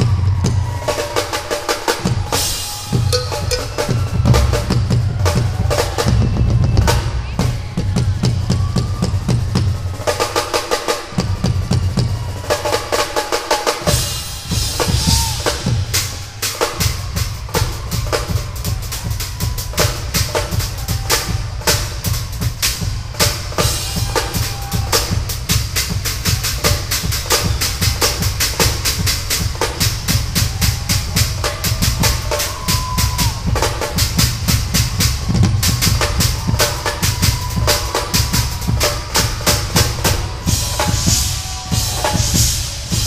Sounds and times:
Drum kit: 0.0 - 43.0
Bass drum: 2.9 - 9.8, 13.9 - 16.2, 16.8 - 43.0.

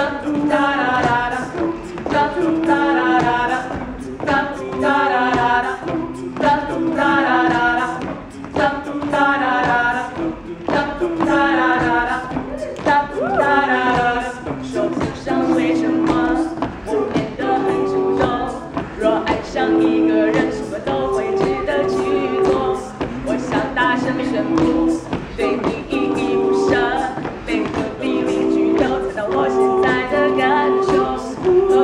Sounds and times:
Music: 0.0 - 31.8.

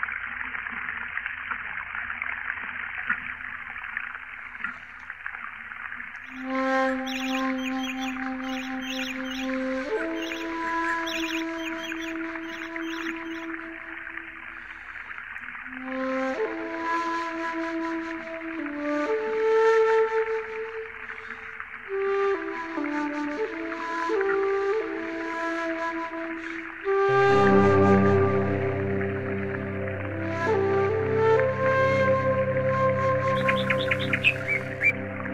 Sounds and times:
Chirp, tweet: 6.3 - 13.5, 33.4 - 35.0.

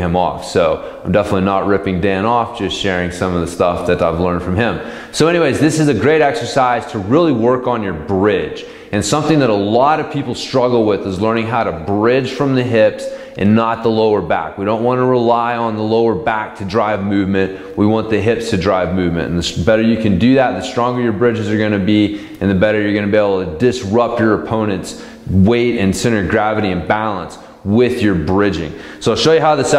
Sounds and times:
Speech: 0.0 - 29.7.

